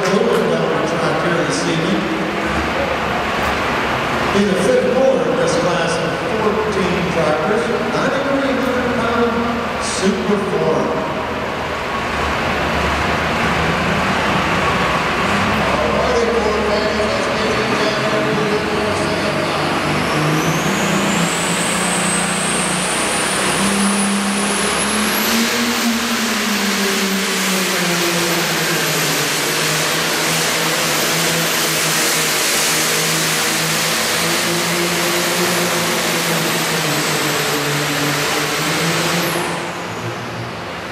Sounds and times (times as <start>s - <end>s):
Speech: 0.0s - 3.1s, 4.3s - 11.2s, 15.6s - 20.2s
Vehicle: 0.0s - 40.9s.